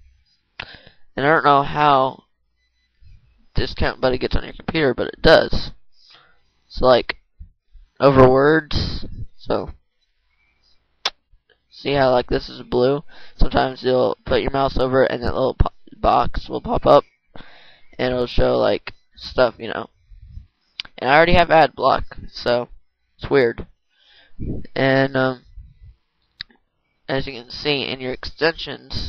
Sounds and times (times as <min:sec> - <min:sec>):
Speech: 0:01.2 - 0:02.2, 0:03.6 - 0:05.8, 0:06.7 - 0:07.2, 0:08.0 - 0:09.8, 0:11.8 - 0:17.0, 0:18.0 - 0:19.9, 0:20.8 - 0:23.7, 0:24.4 - 0:25.7, 0:27.1 - 0:29.0.